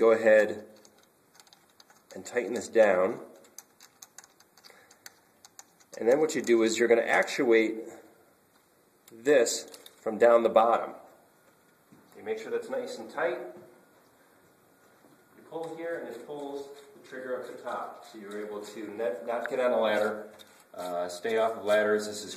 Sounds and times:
Speech: 0.0 - 0.7, 2.1 - 3.3, 6.0 - 8.1, 9.1 - 11.1, 12.2 - 13.7, 15.4 - 22.3.

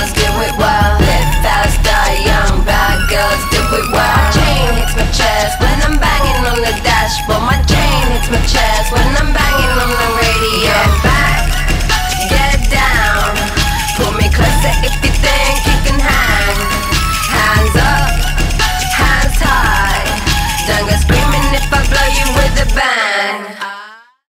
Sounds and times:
Disco: 0.0 - 22.8.

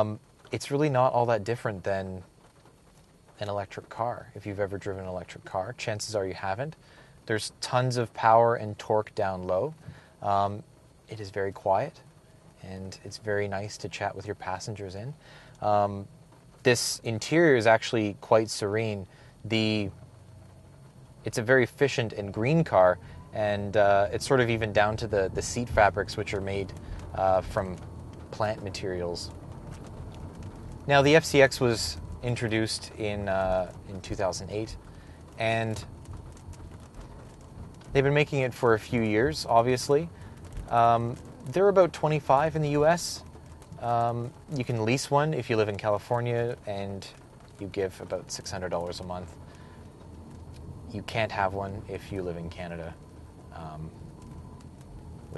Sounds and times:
Speech: 0.0 - 2.3, 3.4 - 12.0, 12.6 - 20.0, 21.3 - 29.4, 30.9 - 34.8, 35.4 - 35.9, 37.9 - 40.1, 40.7 - 43.2, 43.8 - 49.3, 50.9 - 53.0, 53.6 - 54.0.

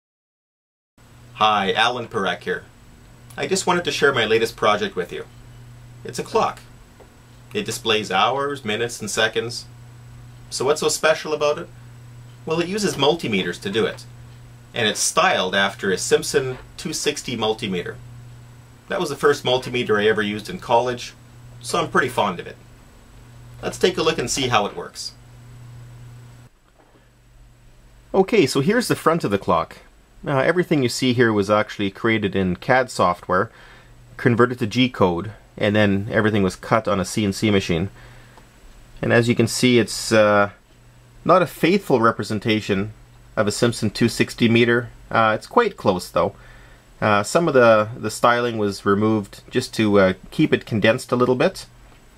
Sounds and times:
Speech: 1.4 - 2.7, 3.3 - 5.3, 6.0 - 6.7, 7.5 - 9.7, 10.5 - 11.8, 12.4 - 14.1, 14.7 - 18.0, 18.9 - 22.6, 23.6 - 25.2, 28.1 - 33.5, 34.2 - 38.0, 39.0 - 40.6, 41.2 - 46.4, 47.0 - 51.7.

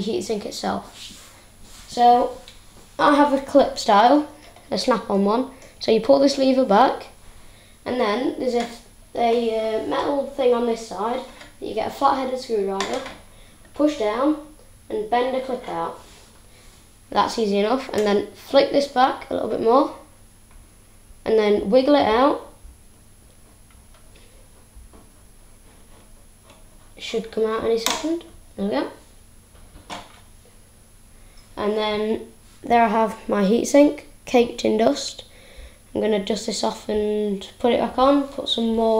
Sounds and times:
Speech: 0.0 - 1.0, 1.9 - 7.2, 7.8 - 13.2, 13.8 - 16.1, 17.1 - 20.1, 21.2 - 22.6, 27.0 - 29.1, 31.6 - 35.3, 35.9 - 38.9.

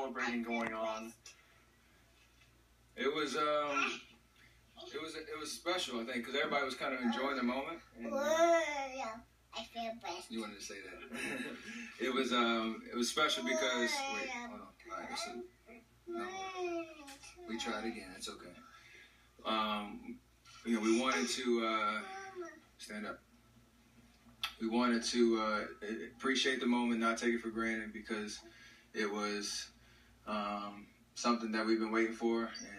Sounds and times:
Babbling: 8.0 - 10.4, 13.3 - 18.0, 20.7 - 22.7.

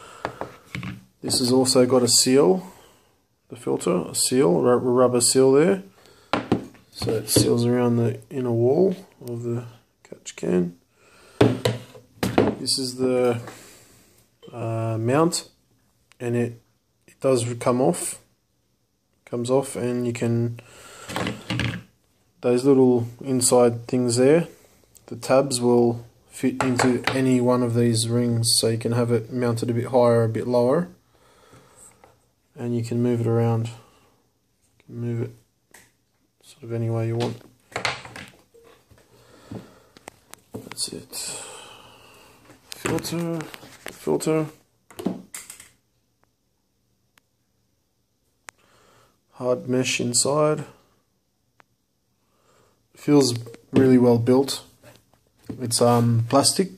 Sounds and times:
Inside, small room: 0.0 - 56.7
Speech: 1.2 - 2.8, 3.5 - 5.9, 7.0 - 10.8, 12.5 - 13.5, 14.4 - 15.6, 16.2 - 18.3, 19.2 - 20.6, 22.4 - 31.0, 32.5 - 33.8, 34.8 - 35.4, 36.4 - 37.4, 40.6 - 41.5, 42.8 - 44.6, 49.4 - 50.8, 53.0 - 54.8, 55.5 - 56.7.

